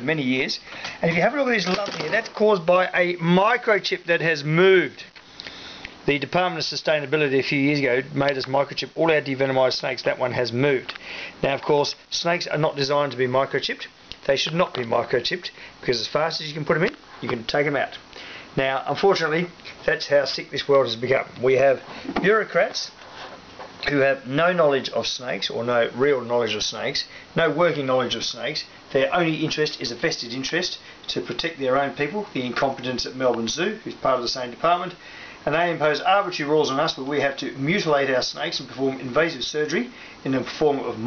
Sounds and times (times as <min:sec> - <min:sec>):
Speech: 0:00.0 - 0:05.2, 0:06.1 - 0:18.0, 0:18.6 - 0:23.0, 0:23.8 - 0:41.0
Inside, small room: 0:00.0 - 0:41.0.